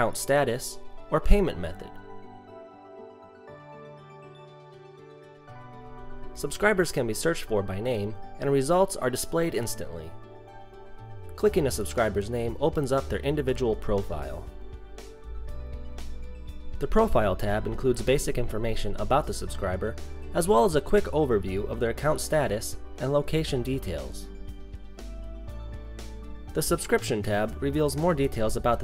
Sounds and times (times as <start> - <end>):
Speech: 0.0 - 2.0, 6.4 - 10.2, 11.4 - 14.5, 16.8 - 24.3, 26.5 - 28.8
Music: 0.0 - 28.8.